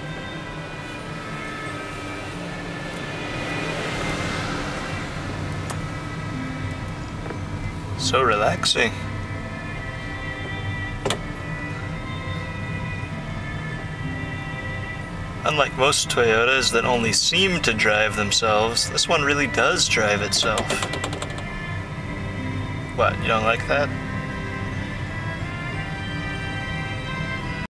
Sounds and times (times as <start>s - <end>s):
Car: 0.0s - 27.7s
Music: 0.0s - 27.7s
Speech: 8.0s - 9.0s, 15.5s - 20.8s, 23.0s - 23.9s.